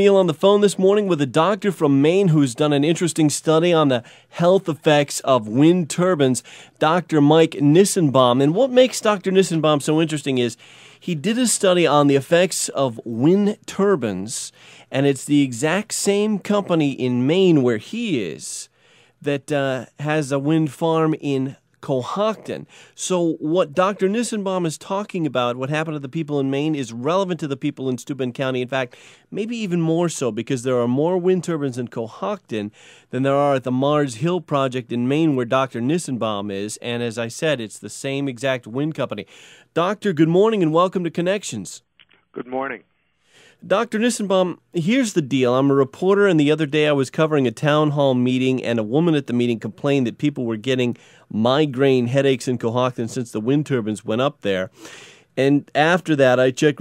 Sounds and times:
Speech: 0.0 - 39.2, 39.8 - 41.8, 42.4 - 42.8, 43.6 - 54.7, 55.4 - 56.8.

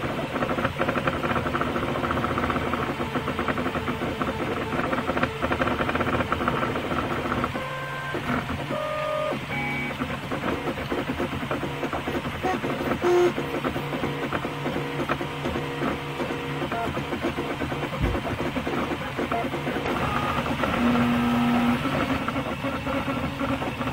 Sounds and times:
Printer: 0.0 - 23.9.

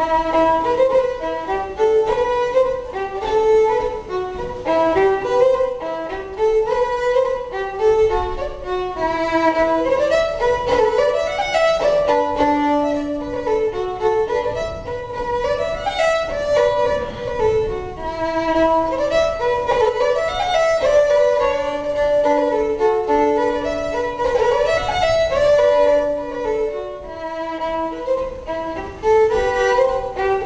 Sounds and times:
Violin, fiddle: 0.0 - 30.4.

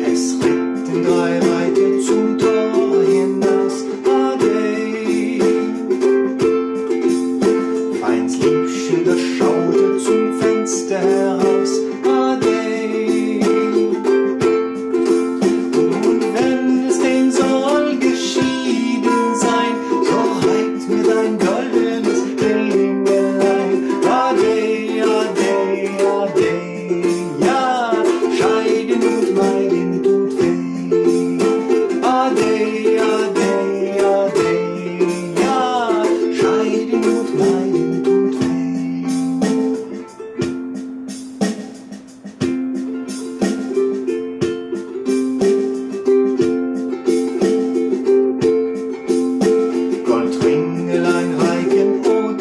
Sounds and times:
Inside, small room: 0.0 - 52.4
Ukulele: 0.0 - 52.4.

